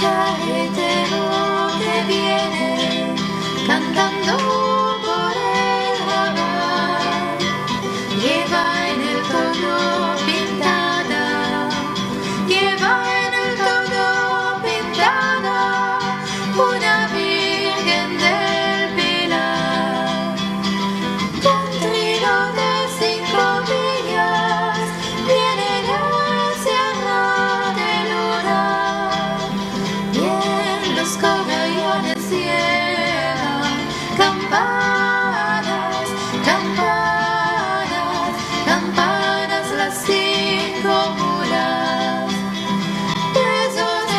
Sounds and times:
Music: 0.0 - 44.1.

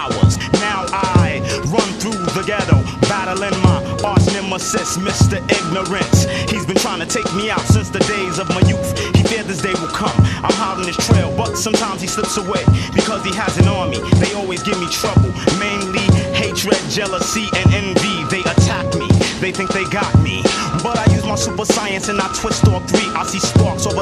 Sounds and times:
Music: 0.0 - 24.0.

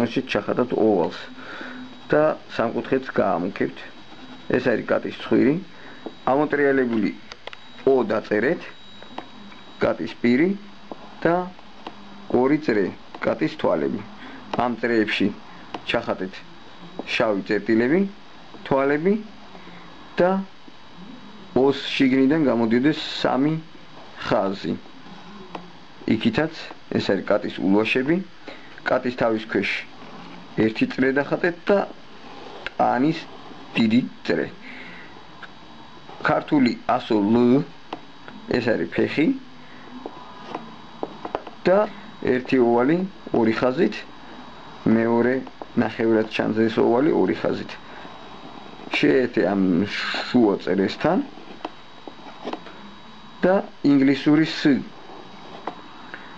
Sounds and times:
Speech: 0.0 - 1.4, 2.0 - 8.8, 9.8 - 11.6, 12.3 - 19.3, 20.2 - 29.9, 30.5 - 32.0, 32.7 - 34.6, 36.2 - 39.5, 41.6 - 44.1, 44.8 - 47.8, 48.9 - 51.4, 53.4 - 55.0.

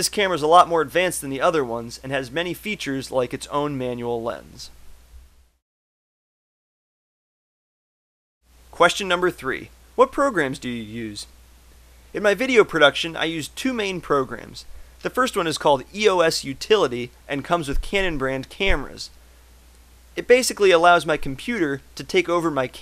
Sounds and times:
Speech: 0.0 - 4.7, 8.8 - 11.3, 12.2 - 19.2, 20.2 - 22.8.

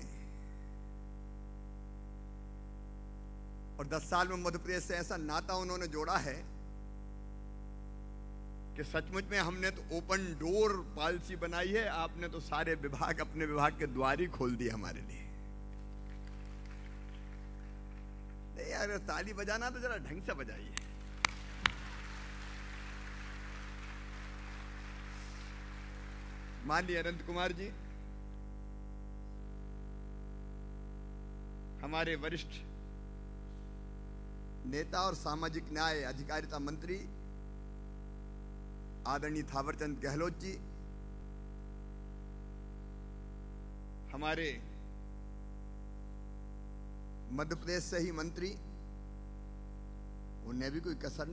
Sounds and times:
Narration, monologue: 0.0 - 51.3
Male speech, man speaking: 3.8 - 6.5, 8.8 - 15.4, 18.6 - 20.8, 26.6 - 27.8, 31.8 - 32.7, 34.7 - 37.2, 39.0 - 40.7, 44.1 - 44.7, 47.3 - 48.6, 50.4 - 51.3.

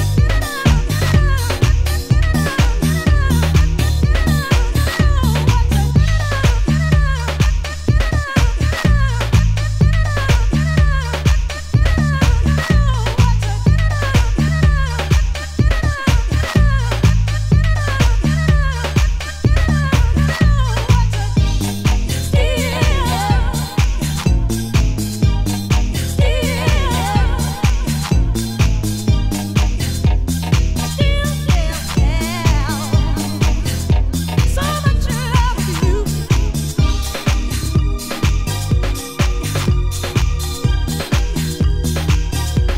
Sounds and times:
Disco: 0.0 - 42.7
House music: 0.0 - 42.7.

